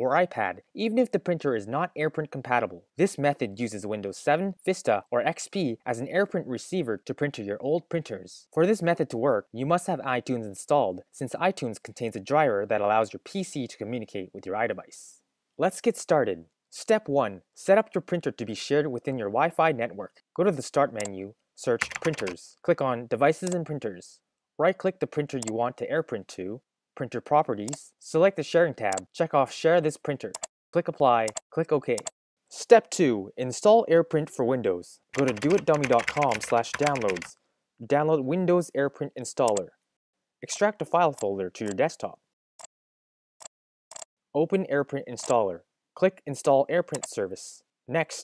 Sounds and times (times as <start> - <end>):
Speech: 0.0 - 39.8, 40.4 - 42.3, 44.4 - 48.2.